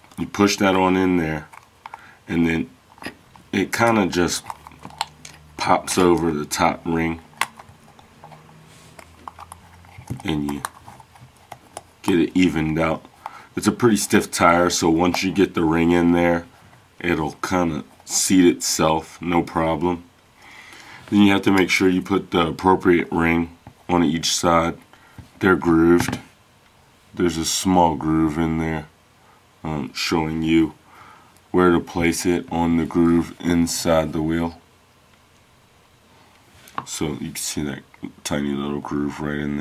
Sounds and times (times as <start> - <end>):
Speech: 0.2 - 1.5, 2.3 - 4.5, 5.6 - 7.2, 10.2 - 10.7, 12.0 - 20.1, 21.1 - 24.8, 25.4 - 26.3, 27.2 - 29.0, 29.6 - 30.8, 31.5 - 34.6, 36.8 - 39.6.